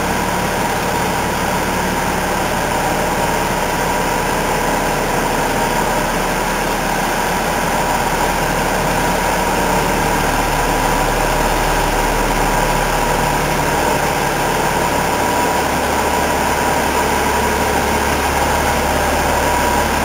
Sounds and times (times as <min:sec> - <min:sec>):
Truck: 0:00.0 - 0:20.0.